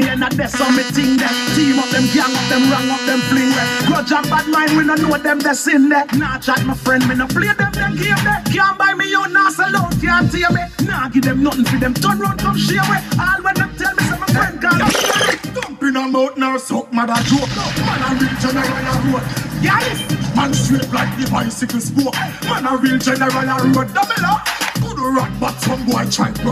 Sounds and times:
Music: 0.0 - 26.5
Speech: 12.8 - 21.4.

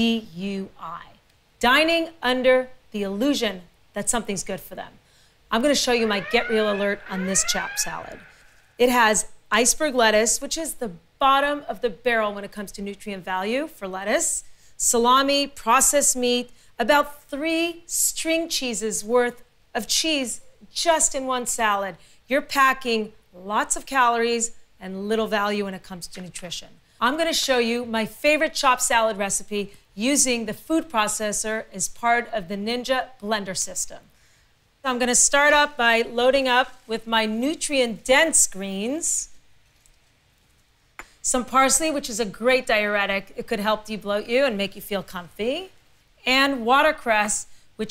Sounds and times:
Speech: 0.0 - 8.2, 8.8 - 34.1, 34.8 - 39.3, 41.2 - 47.9.

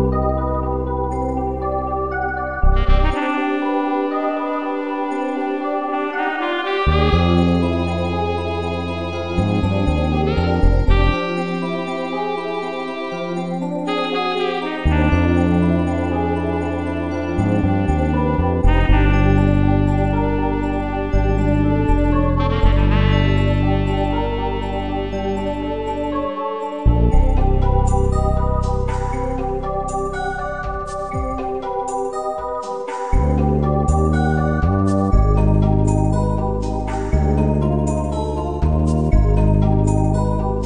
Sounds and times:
Theme music: 0.0 - 40.6.

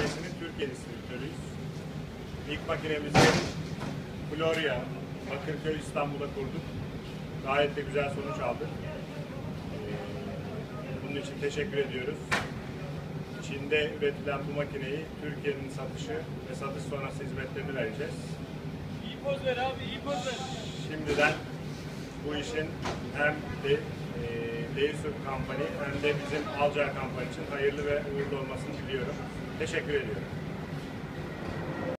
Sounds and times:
Speech: 0.0 - 1.5, 2.4 - 3.5, 4.3 - 6.7, 7.4 - 12.3, 13.4 - 18.4, 19.0 - 21.5, 22.2 - 30.3.

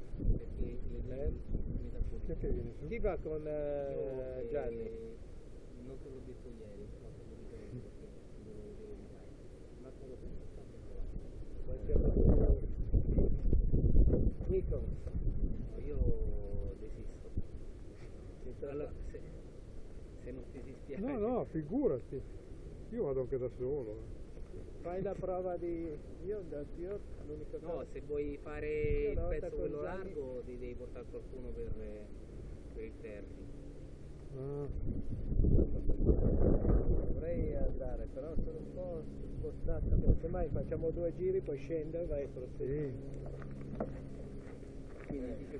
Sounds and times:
Speech: 0.3 - 13.0, 14.4 - 15.0, 15.6 - 17.3, 18.4 - 19.4, 20.2 - 22.2, 22.9 - 24.1, 24.8 - 32.1, 32.7 - 33.4, 37.1 - 43.0, 45.0 - 45.5.

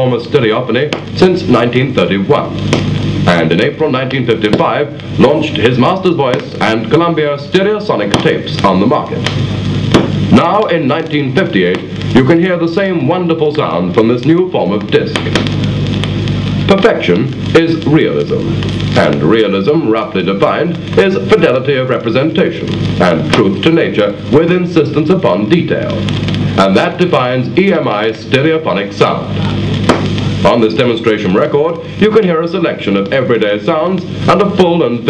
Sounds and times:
Male speech, man speaking: 0.0 - 2.6, 3.3 - 9.3, 10.3 - 15.3, 16.7 - 26.0, 26.6 - 29.5, 30.4 - 35.1.

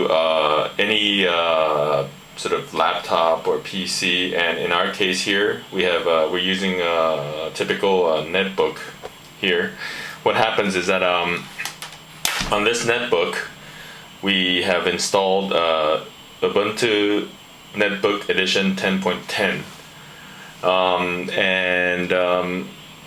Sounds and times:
Speech: 0.0 - 11.6, 12.3 - 13.6, 14.2 - 19.8, 20.6 - 22.8.

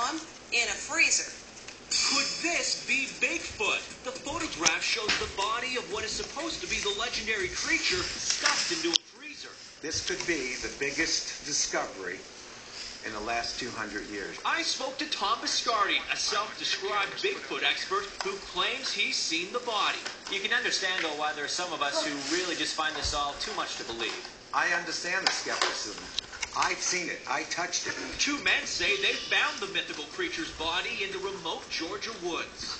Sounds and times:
Speech: 2.0 - 12.2, 13.0 - 32.7.

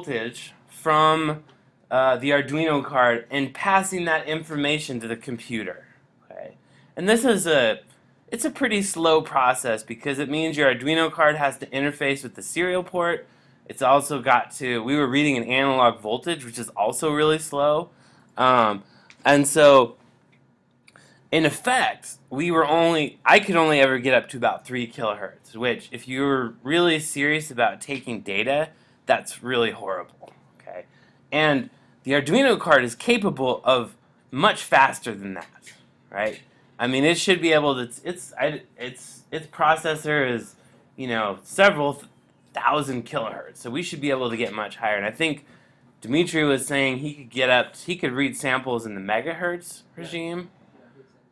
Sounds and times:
Speech: 0.0 - 20.0, 21.3 - 45.4, 46.0 - 51.0.

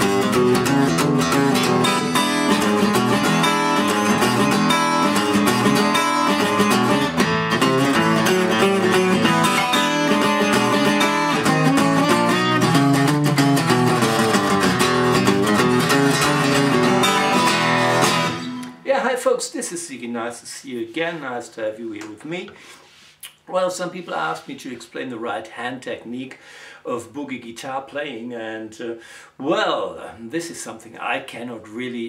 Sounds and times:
Strum: 0.0 - 18.9
Acoustic guitar: 0.0 - 19.0
Speech: 18.8 - 22.6, 23.2 - 32.0.

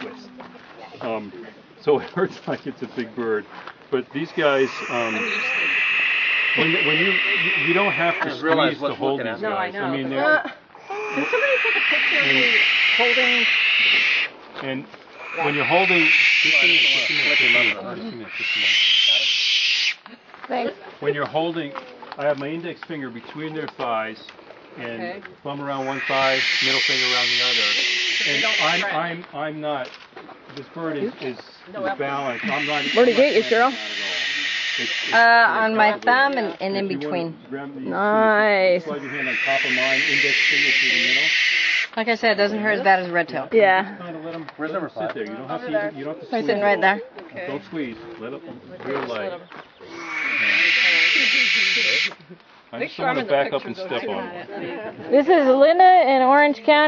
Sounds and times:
Owl: 4.3 - 8.8, 10.8 - 14.3, 15.2 - 20.0, 25.7 - 29.0, 32.1 - 35.7, 38.9 - 42.0, 49.8 - 52.2.

